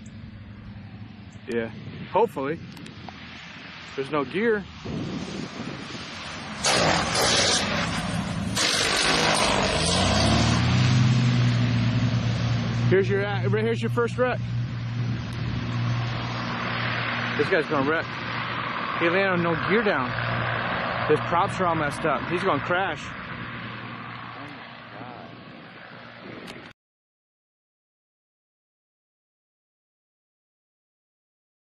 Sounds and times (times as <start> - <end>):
Speech: 1.5 - 2.6, 4.0 - 4.7, 12.9 - 14.4, 17.4 - 18.1, 19.0 - 20.2, 21.1 - 23.1, 24.4 - 25.4.